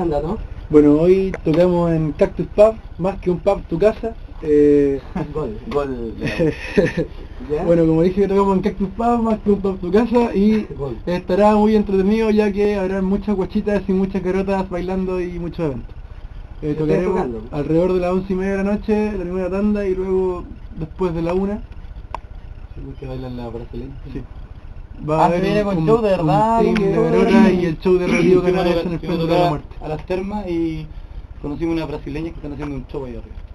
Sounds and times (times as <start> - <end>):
Speech: 16.6 - 21.6, 25.0 - 33.4.